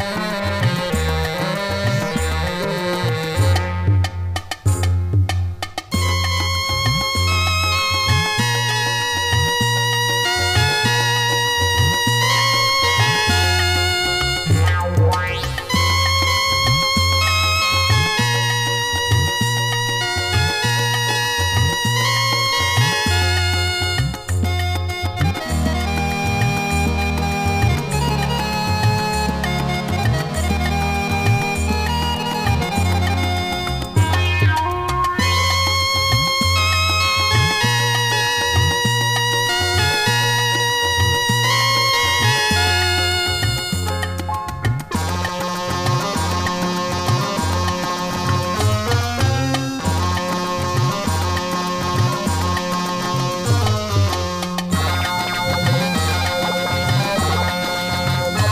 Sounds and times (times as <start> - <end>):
Music: 0.0 - 58.5.